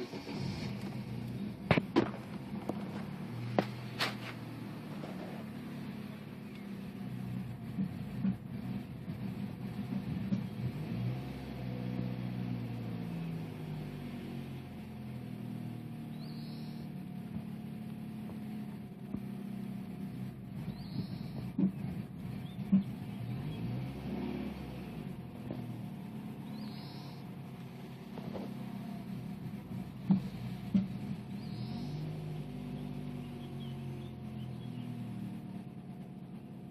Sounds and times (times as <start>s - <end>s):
Car: 0.0s - 36.7s.